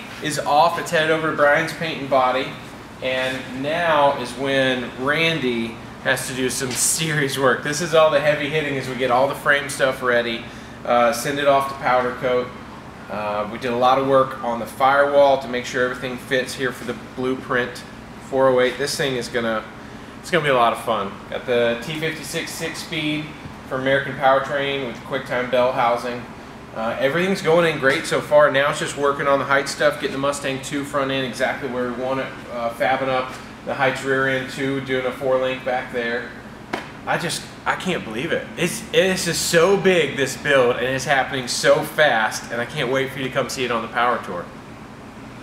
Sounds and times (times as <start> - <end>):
Speech: 0.0 - 36.4, 37.1 - 44.5.